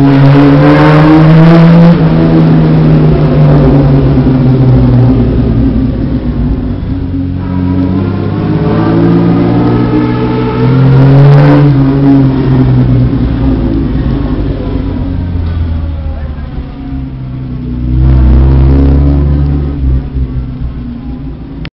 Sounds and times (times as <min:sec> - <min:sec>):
Speech: 0:15.6 - 0:17.5.